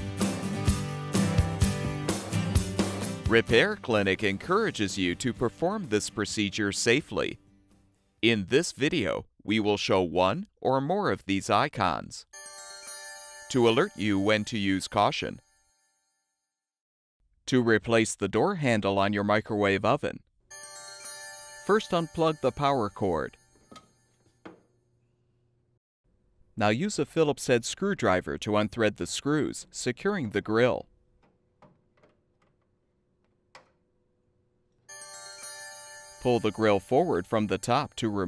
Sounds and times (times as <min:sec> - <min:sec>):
Speech: 0:03.3 - 0:07.4, 0:08.2 - 0:12.3, 0:13.5 - 0:15.4, 0:17.5 - 0:20.2, 0:21.7 - 0:23.4, 0:26.6 - 0:30.9, 0:36.2 - 0:38.2.